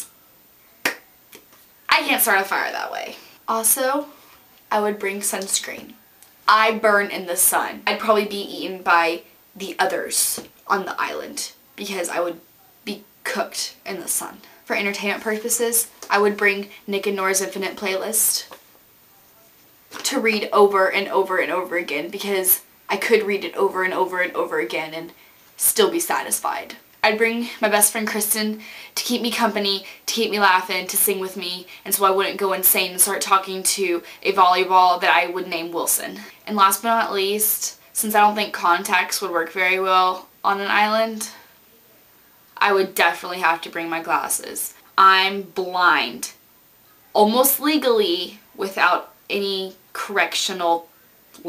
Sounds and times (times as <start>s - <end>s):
Speech: 1.9s - 18.6s, 20.0s - 41.5s, 42.6s - 46.4s, 47.1s - 51.4s.